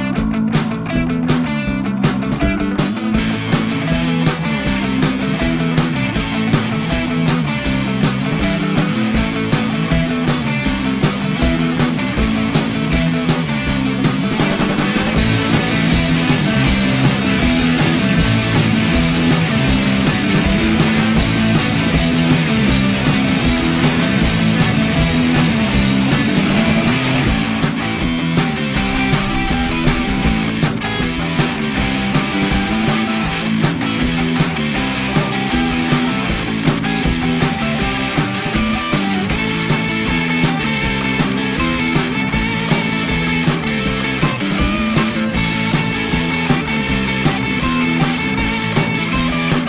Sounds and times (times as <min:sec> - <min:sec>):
Music: 0:00.0 - 0:49.6.